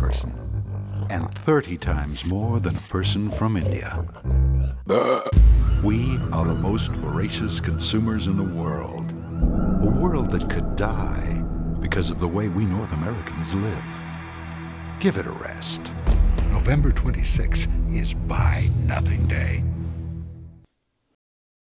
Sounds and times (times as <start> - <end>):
Speech: 0.0 - 4.4, 5.8 - 9.1, 9.7 - 14.0, 15.0 - 19.7
Music: 0.0 - 20.7.